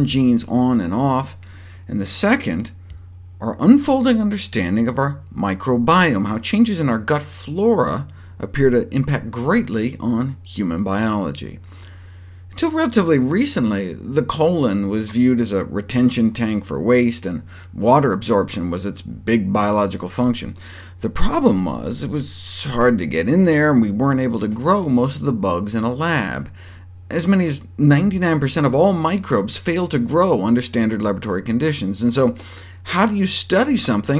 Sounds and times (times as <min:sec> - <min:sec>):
Speech: 0:00.0 - 0:02.8, 0:03.4 - 0:11.6, 0:12.6 - 0:34.1.